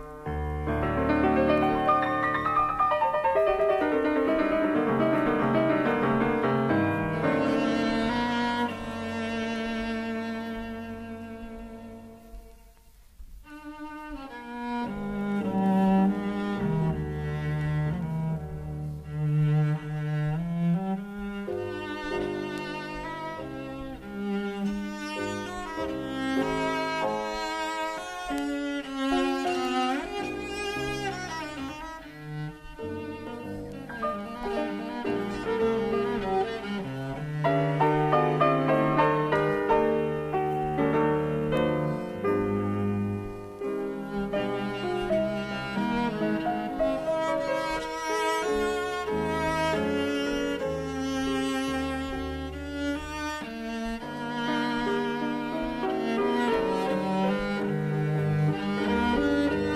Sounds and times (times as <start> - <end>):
Cello: 0.0 - 59.7.